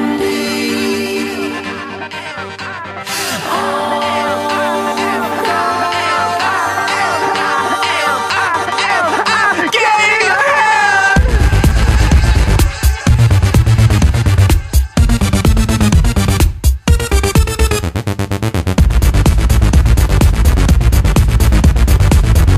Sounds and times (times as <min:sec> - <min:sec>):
Electronic dance music: 0:00.0 - 0:22.5.